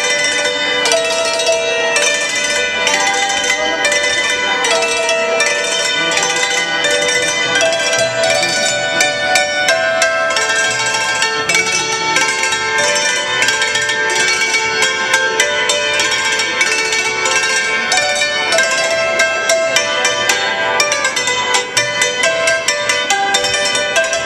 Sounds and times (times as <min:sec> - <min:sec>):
Music: 0:00.0 - 0:24.2.